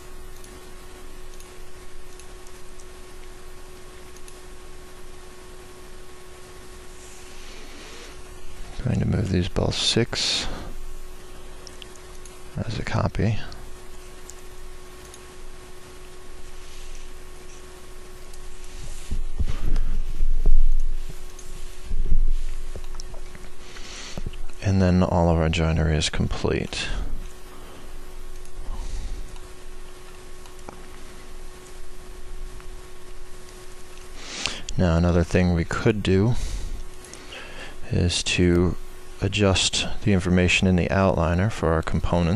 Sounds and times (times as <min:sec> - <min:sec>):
Speech: 0:08.8 - 0:10.7, 0:12.6 - 0:13.6, 0:24.6 - 0:27.1, 0:34.7 - 0:36.4, 0:37.9 - 0:42.3.